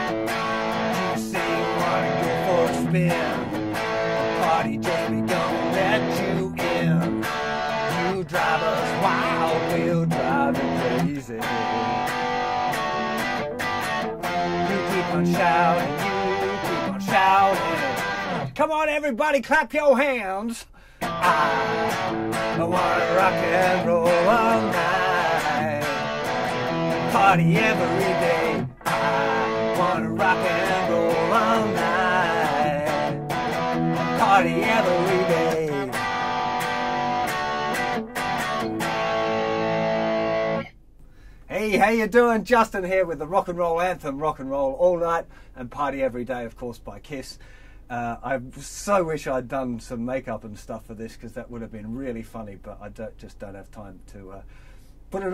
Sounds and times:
Rock and roll: 0.0s - 18.6s, 21.0s - 40.7s
Strum: 0.0s - 18.6s, 21.0s - 41.6s
Acoustic guitar: 0.0s - 19.8s, 20.8s - 42.6s.

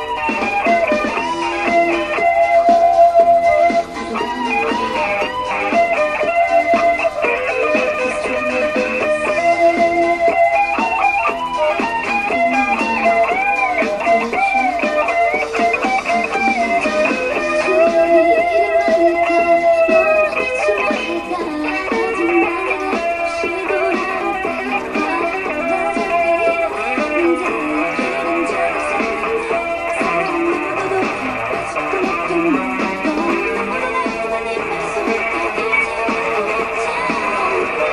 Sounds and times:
Electric guitar: 0.0s - 37.9s.

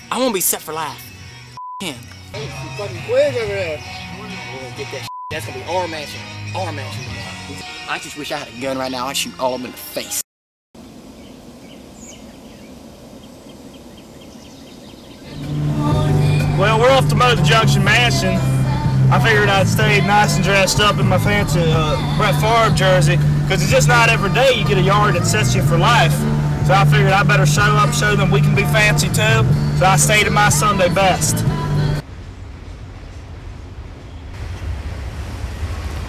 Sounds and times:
Insect: 10.8s - 15.3s.

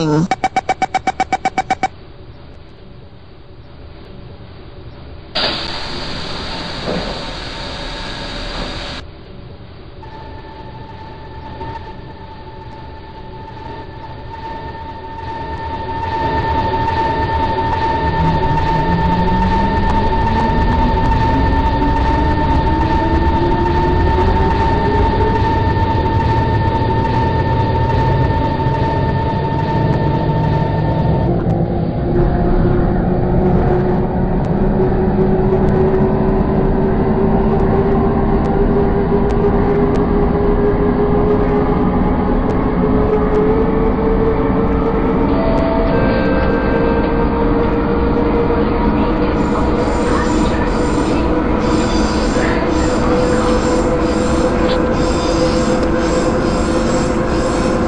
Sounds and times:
Vehicle: 16.1s - 50.6s.

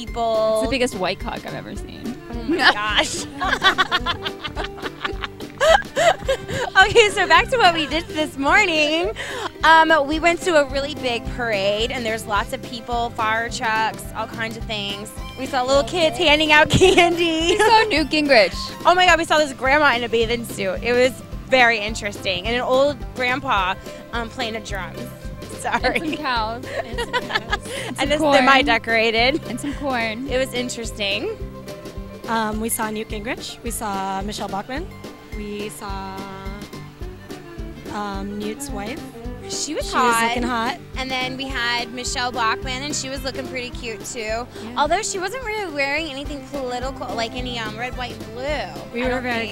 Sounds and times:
Speech: 0.0s - 3.3s, 6.8s - 27.2s, 27.9s - 31.4s, 32.3s - 36.6s, 37.9s - 49.5s
Music: 0.0s - 49.5s.

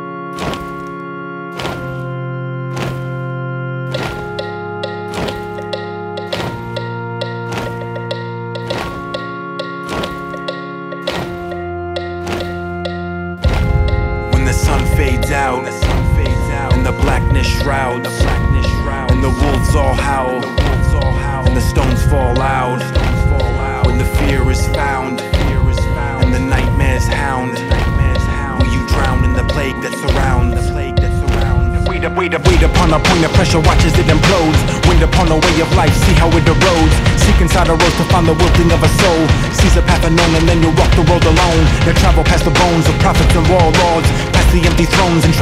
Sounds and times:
Music: 0.0s - 45.4s.

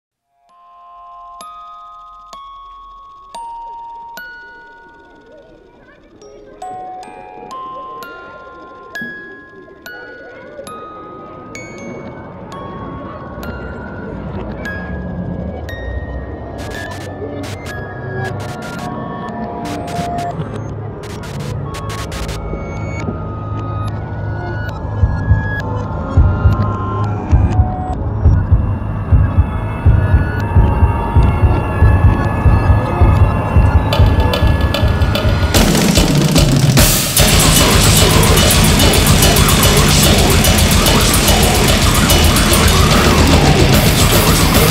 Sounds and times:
Music: 0.1s - 44.7s
Speech: 4.7s - 21.6s.

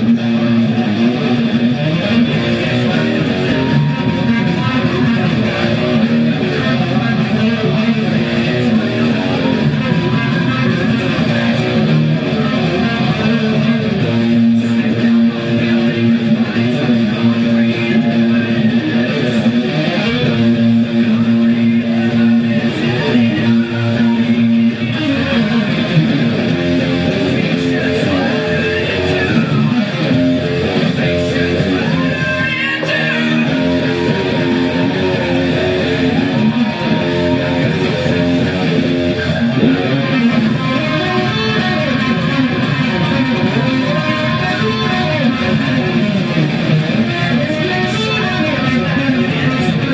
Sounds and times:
Electric guitar: 0.0s - 49.9s.

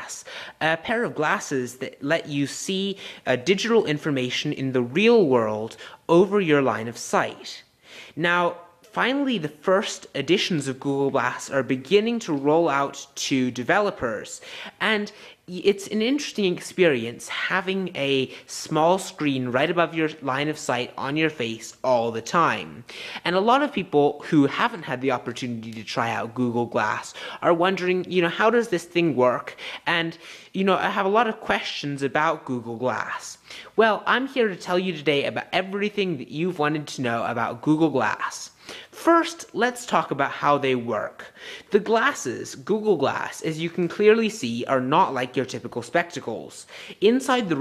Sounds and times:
Speech: 0.0s - 47.6s.

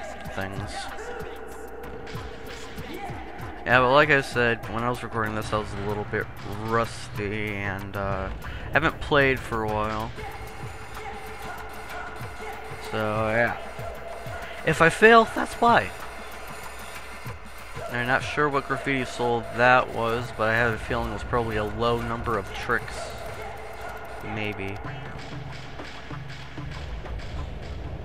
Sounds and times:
Speech: 0.0s - 1.4s, 2.9s - 10.4s, 12.8s - 13.6s, 14.6s - 16.0s, 17.9s - 23.3s, 24.2s - 25.1s.

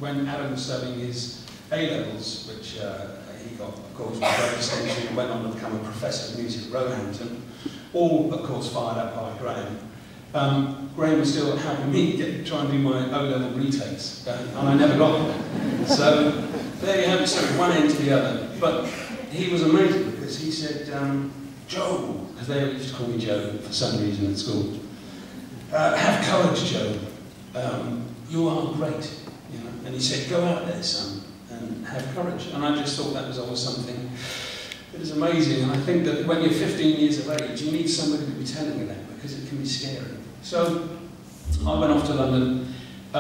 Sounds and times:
Speech: 0.0s - 24.8s, 25.6s - 34.2s, 34.9s - 43.2s.

